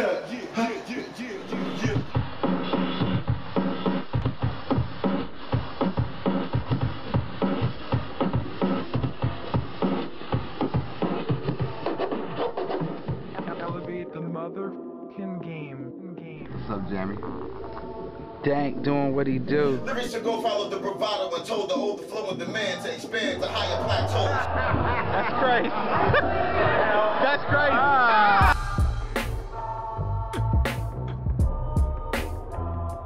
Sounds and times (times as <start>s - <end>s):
Scratching (performance technique): 1.5s - 13.5s
Speech: 13.4s - 17.4s, 18.4s - 24.5s.